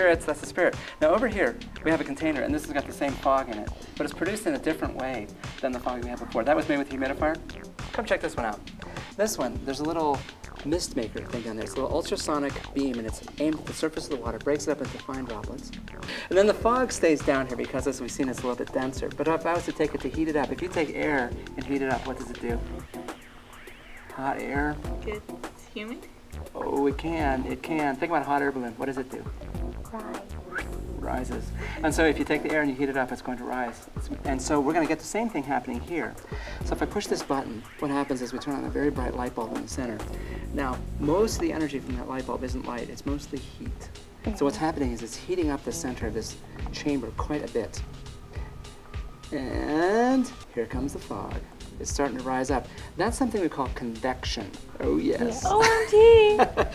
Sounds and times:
Music: 0.0 - 56.7.

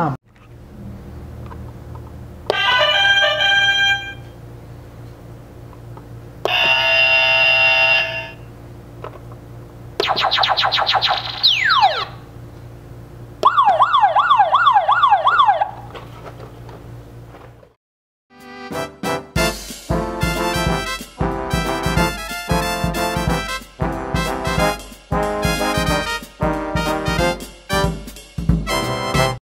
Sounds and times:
Music: 18.3 - 29.4.

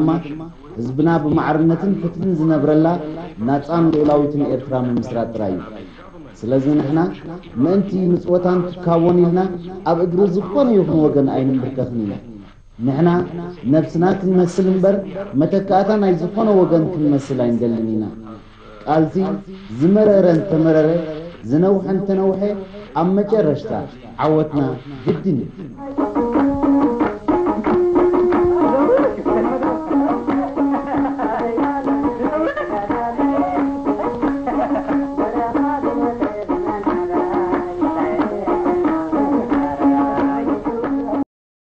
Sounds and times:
Middle Eastern music: 0.0 - 41.3.

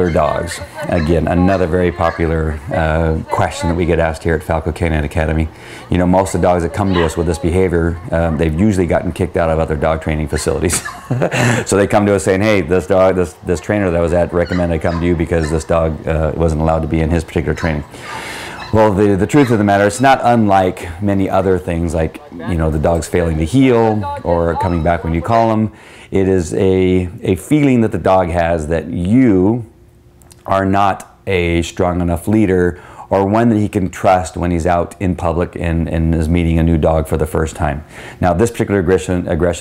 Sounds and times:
Speech: 0.0 - 10.8, 11.7 - 17.9, 18.6 - 29.7, 30.4 - 39.6.

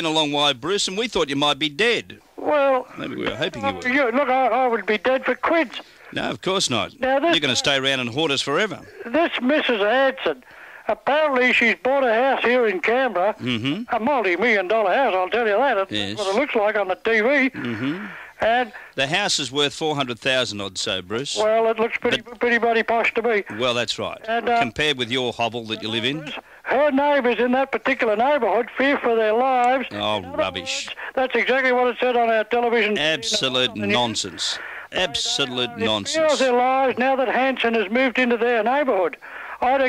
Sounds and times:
Speech: 0.0 - 39.8.

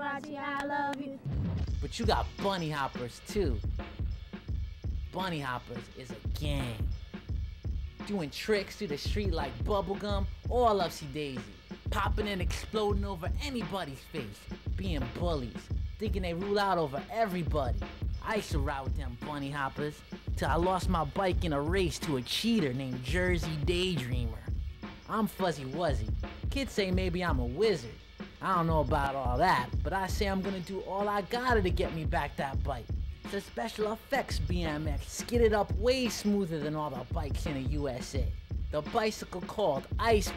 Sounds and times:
Speech: 0.0 - 1.2, 1.8 - 3.6, 5.1 - 6.9, 8.0 - 24.5, 25.1 - 40.3
Music: 0.0 - 40.3.

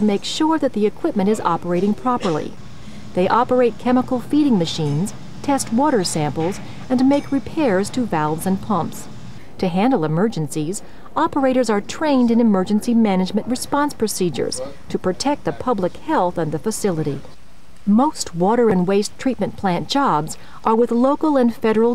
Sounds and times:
Speech: 0.0 - 2.6, 3.2 - 17.3, 17.9 - 21.9.

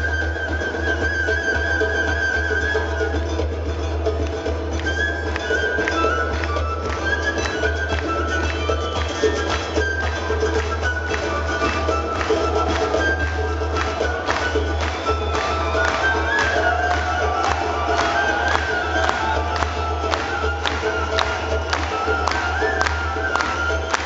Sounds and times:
Orchestra: 0.0 - 24.0
Soundtrack music: 3.2 - 24.0.

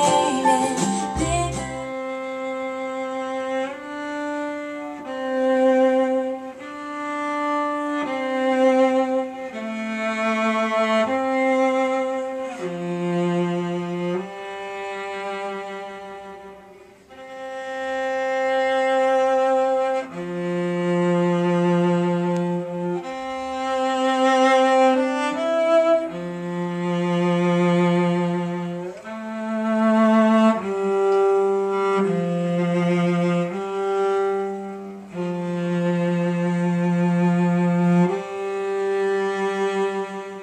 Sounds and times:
Cello: 0.0 - 40.4.

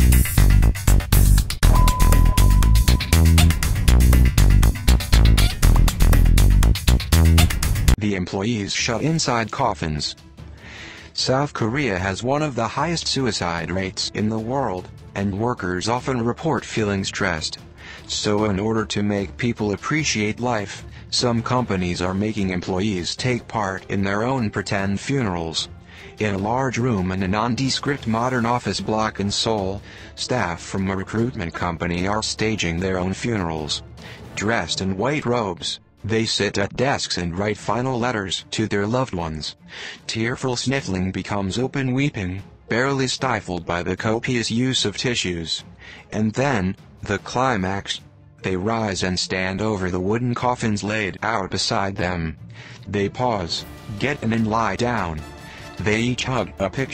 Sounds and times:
Music: 0.0 - 56.9
Speech: 8.0 - 10.2, 11.2 - 33.8, 34.4 - 56.9.

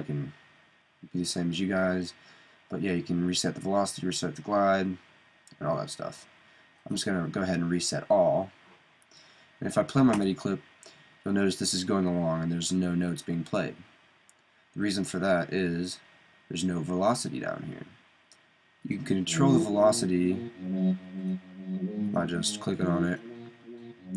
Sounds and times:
Speech: 0.0 - 0.4, 1.1 - 5.0, 5.6 - 6.3, 6.9 - 8.6, 9.6 - 10.6, 11.3 - 13.8, 14.8 - 17.9, 18.9 - 23.5.

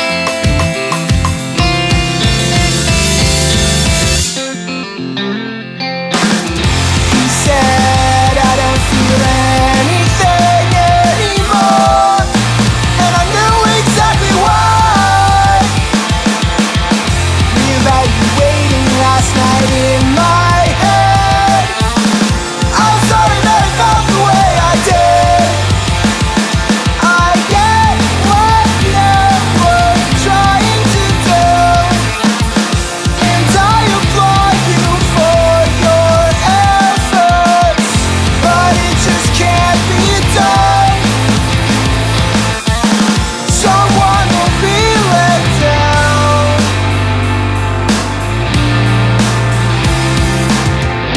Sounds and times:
Dance music: 0.0 - 4.5, 6.2 - 51.1.

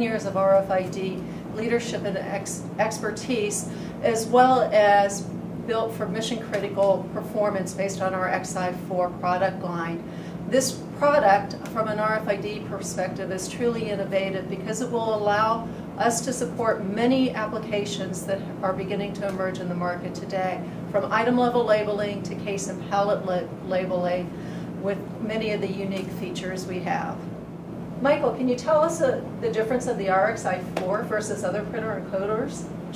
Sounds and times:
Speech: 0.0 - 27.2, 28.0 - 32.9.

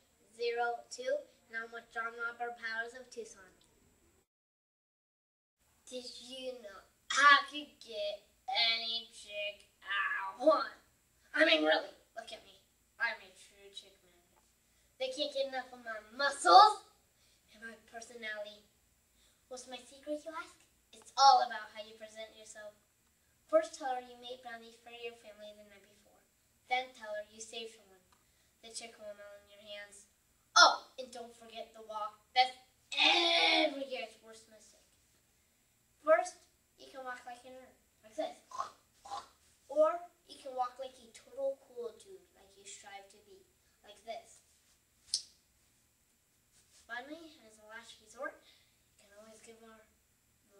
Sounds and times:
Narration, monologue: 0.0 - 4.3, 5.6 - 50.5.

